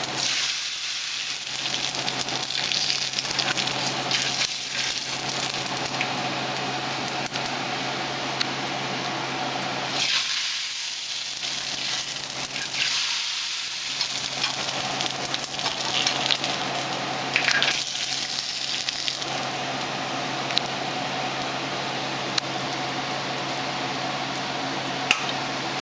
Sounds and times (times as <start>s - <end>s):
Frying (food): 0.0s - 25.8s
Sizzle: 0.0s - 25.8s.